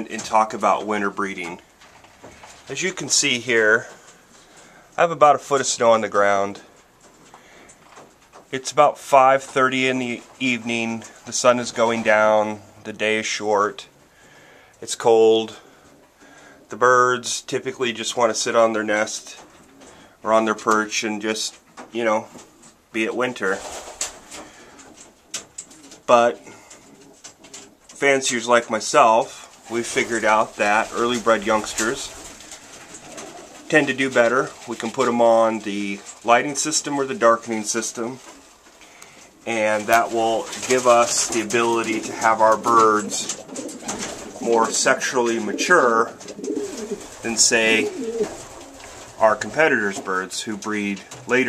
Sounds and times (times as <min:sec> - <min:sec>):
Speech: 0:00.0 - 0:01.6, 0:02.7 - 0:04.0, 0:05.0 - 0:06.7, 0:08.5 - 0:13.9, 0:14.8 - 0:15.6, 0:16.7 - 0:19.5, 0:20.2 - 0:23.7, 0:26.1 - 0:26.5, 0:28.0 - 0:32.2, 0:33.7 - 0:38.2, 0:39.4 - 0:43.4, 0:44.4 - 0:46.2, 0:47.2 - 0:48.0, 0:49.2 - 0:51.4
Inside, small room: 0:00.0 - 0:51.4.